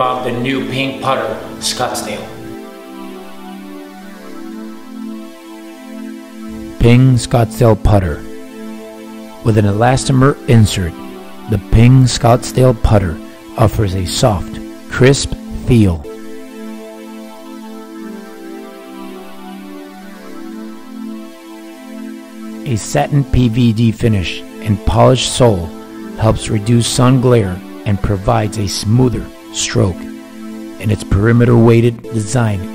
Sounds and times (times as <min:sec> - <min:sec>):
Speech: 0:00.0 - 0:02.4, 0:06.8 - 0:08.3, 0:09.5 - 0:16.1, 0:22.7 - 0:30.1, 0:30.8 - 0:32.7
Music: 0:00.0 - 0:32.7.